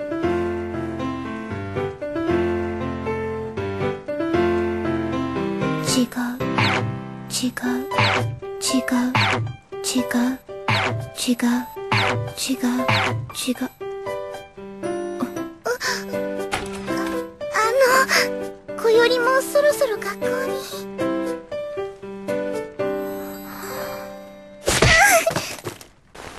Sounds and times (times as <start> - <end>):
Music: 0.0 - 24.8
Speech: 5.8 - 6.4, 17.5 - 20.8.